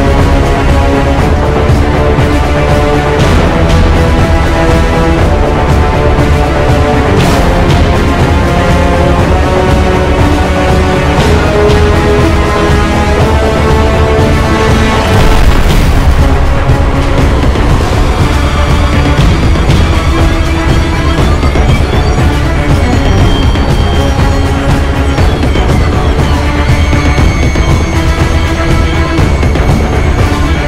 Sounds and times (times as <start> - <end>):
Music: 0.0 - 30.6.